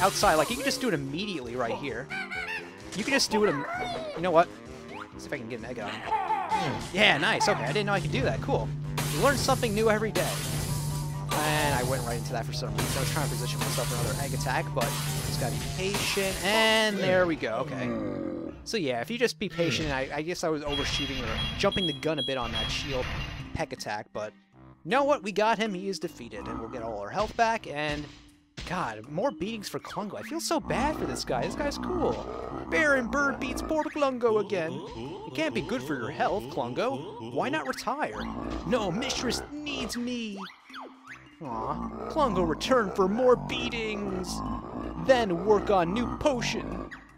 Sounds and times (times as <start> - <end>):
Speech: 0.0 - 2.0, 3.0 - 4.5, 5.2 - 10.4, 11.4 - 18.1, 18.7 - 24.3, 24.9 - 28.1, 28.7 - 40.5, 41.4 - 44.4, 45.0 - 46.8
Music: 0.0 - 47.1.